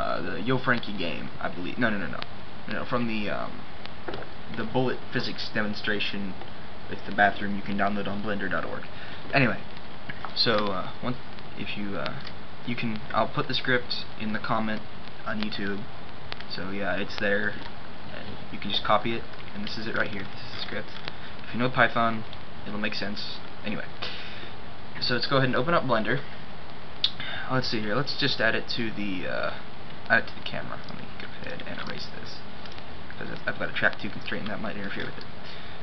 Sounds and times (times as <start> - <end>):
Speech: 0.0 - 3.6, 4.5 - 9.6, 10.4 - 15.9, 16.5 - 24.0, 25.0 - 26.3, 27.1 - 32.4, 33.1 - 35.3.